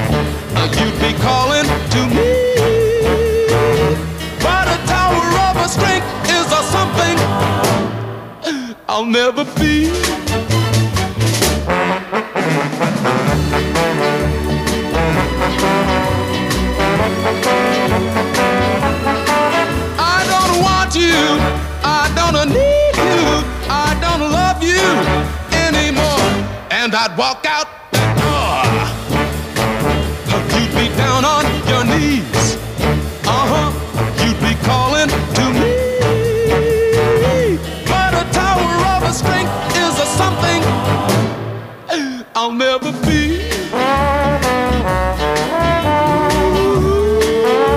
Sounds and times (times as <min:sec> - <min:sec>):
Trombone: 0:00.0 - 0:08.4, 0:09.6 - 0:26.9, 0:28.0 - 0:41.8, 0:43.0 - 0:47.7
Swing music: 0:00.0 - 0:47.7.